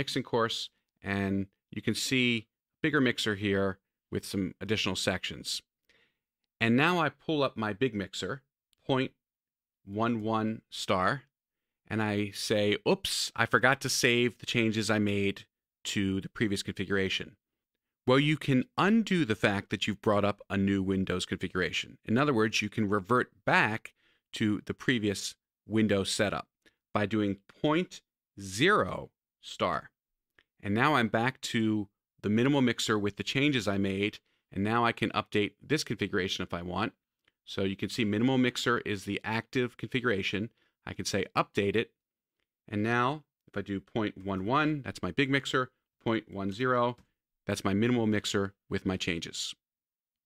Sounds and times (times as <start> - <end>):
Speech: 0.0 - 5.7, 6.6 - 9.2, 9.8 - 17.4, 18.1 - 30.0, 30.6 - 42.0, 42.7 - 49.6.